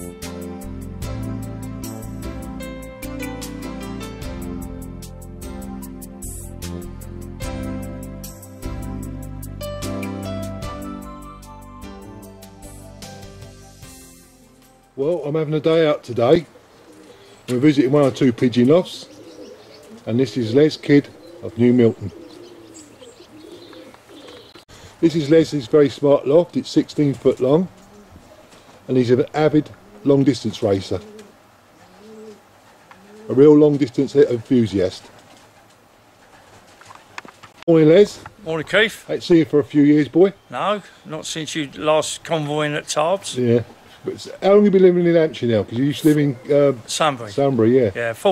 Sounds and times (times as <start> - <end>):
Music: 0.0 - 15.0
Speech: 15.0 - 16.5, 17.5 - 19.1, 20.1 - 22.1, 25.0 - 27.7, 28.9 - 31.0, 33.3 - 35.1, 37.7 - 48.3
Coo: 16.4 - 24.6, 27.7 - 28.7, 29.6 - 33.6.